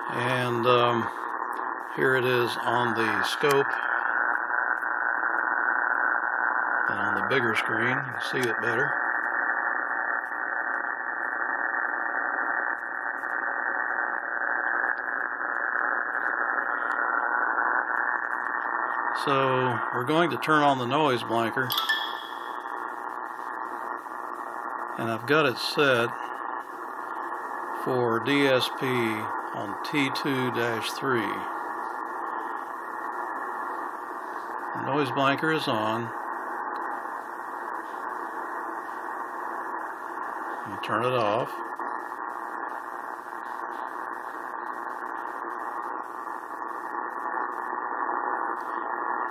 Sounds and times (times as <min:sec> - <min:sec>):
Cacophony: 0:00.0 - 0:49.3
Speech: 0:00.1 - 0:01.1, 0:02.0 - 0:03.8, 0:06.9 - 0:09.0, 0:19.2 - 0:21.8, 0:25.0 - 0:26.2, 0:27.8 - 0:31.5, 0:34.8 - 0:36.2, 0:40.6 - 0:41.6.